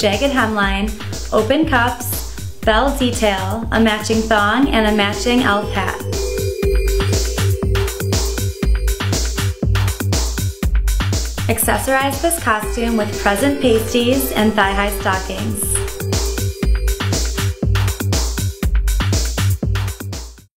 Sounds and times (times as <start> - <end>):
Speech: 0.0 - 6.0, 11.4 - 16.0
Jingle (music): 0.0 - 20.4.